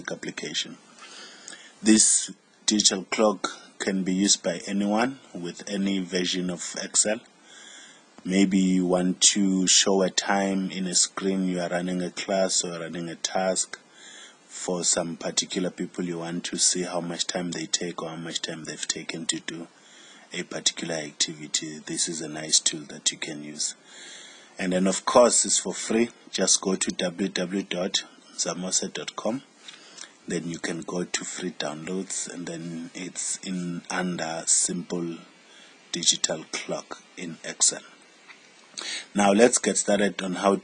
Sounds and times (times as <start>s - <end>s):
Speech: 0.0s - 0.8s, 1.8s - 7.3s, 8.2s - 13.8s, 14.5s - 19.7s, 20.3s - 23.8s, 24.6s - 29.5s, 30.2s - 35.3s, 35.9s - 38.0s, 38.8s - 40.6s.